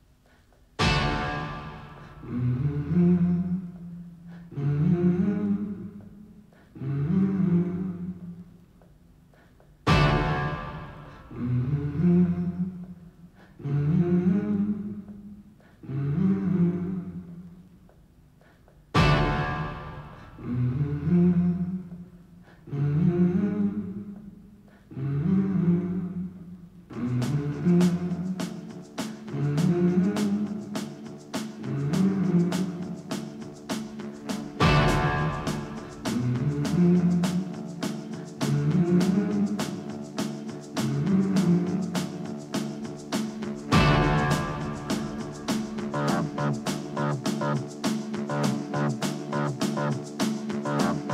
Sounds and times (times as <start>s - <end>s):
Music: 0.2s - 6.9s, 8.1s - 13.6s, 17.6s - 22.7s, 26.6s - 51.1s.